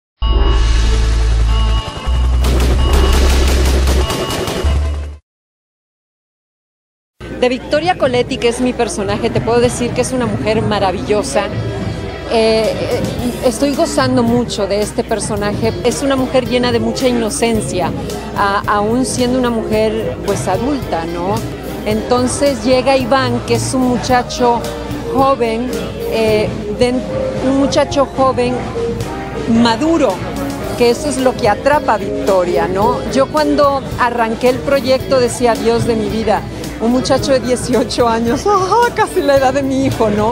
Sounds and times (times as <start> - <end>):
Music: 0.4 - 5.2, 7.2 - 40.3
Fusillade: 2.3 - 5.1
Female speech, woman speaking: 7.4 - 11.6, 12.3 - 28.6, 29.5 - 30.2, 30.8 - 40.3.